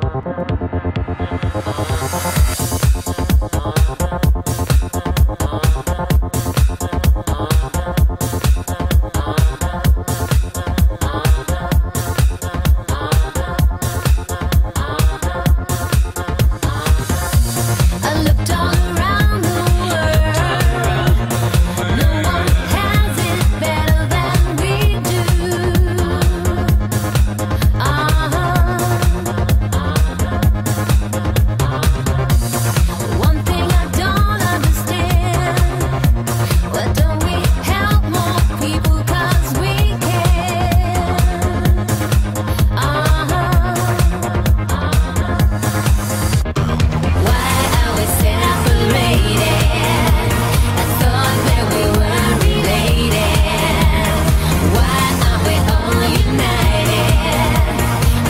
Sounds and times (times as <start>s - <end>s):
Music: 0.0s - 58.2s.